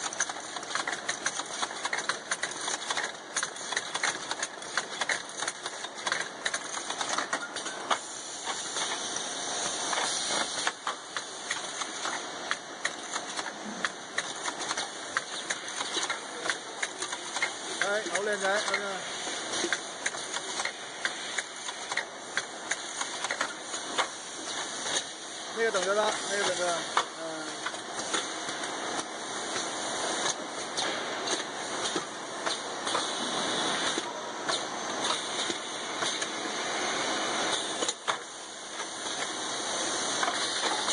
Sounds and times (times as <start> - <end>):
Speech: 17.8 - 19.1, 25.5 - 27.6.